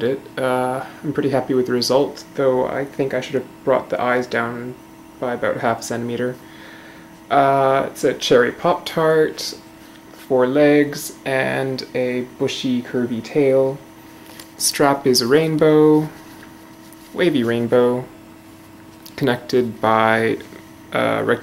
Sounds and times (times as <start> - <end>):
Speech: 0.0 - 6.4, 7.3 - 9.6, 10.2 - 13.8, 14.6 - 16.2, 17.1 - 18.1, 19.1 - 21.4.